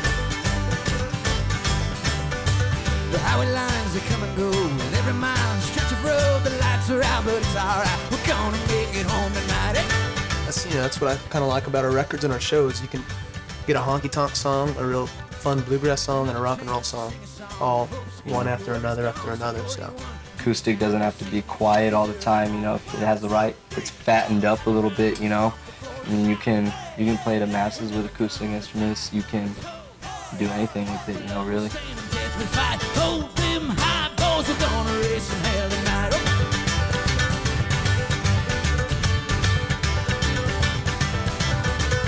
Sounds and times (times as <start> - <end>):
Rhythm and blues: 0.0 - 42.0
Speech: 10.5 - 13.1, 13.7 - 29.7, 30.3 - 31.9.